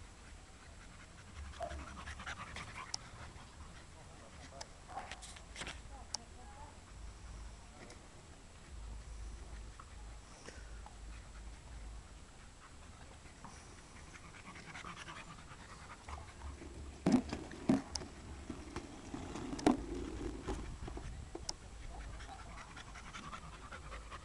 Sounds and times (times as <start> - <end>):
Dog: 0.1 - 5.4, 8.6 - 24.2.